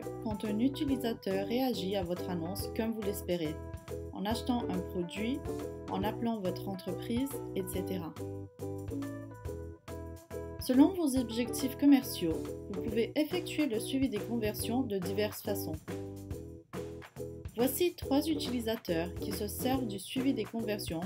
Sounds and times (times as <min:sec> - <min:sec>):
Speech: 0:00.0 - 0:03.6, 0:04.2 - 0:08.2, 0:10.6 - 0:15.8, 0:17.6 - 0:21.0
Music: 0:00.0 - 0:21.0.